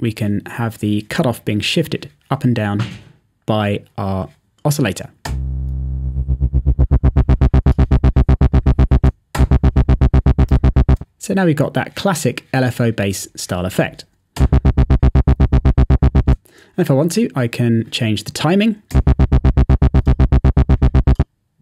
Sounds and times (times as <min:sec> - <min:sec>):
Speech: 0:00.0 - 0:05.2, 0:11.2 - 0:14.1, 0:16.8 - 0:18.9.